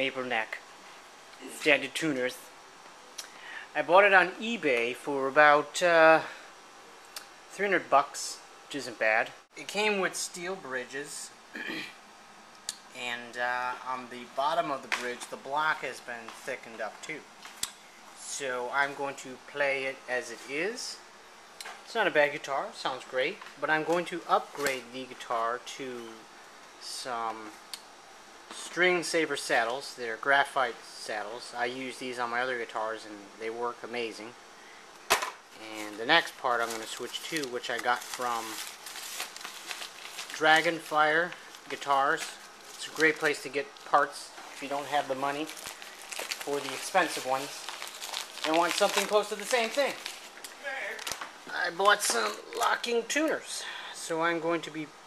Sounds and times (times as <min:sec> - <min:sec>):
Speech: 0:00.0 - 0:00.6, 0:01.4 - 0:02.5, 0:03.7 - 0:06.4, 0:07.5 - 0:11.9, 0:12.9 - 0:17.3, 0:18.2 - 0:21.0, 0:21.9 - 0:27.6, 0:28.5 - 0:34.4, 0:35.6 - 0:38.7, 0:40.3 - 0:45.6, 0:46.4 - 0:47.7, 0:48.4 - 0:55.0.